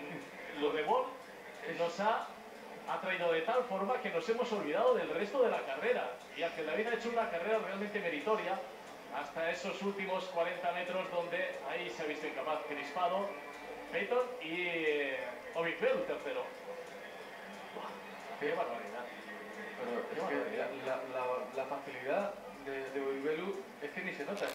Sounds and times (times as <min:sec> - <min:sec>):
Speech: 0:00.0 - 0:17.0, 0:17.7 - 0:24.5.